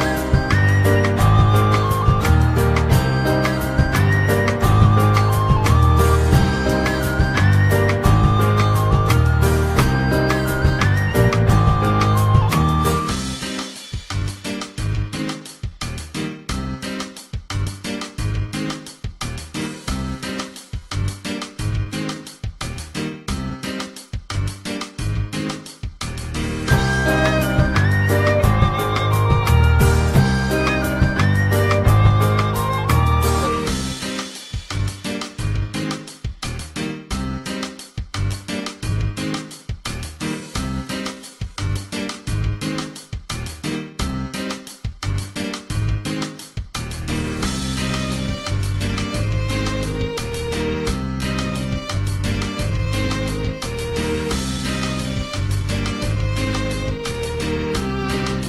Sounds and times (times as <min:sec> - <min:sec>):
Music: 0:00.0 - 0:58.4.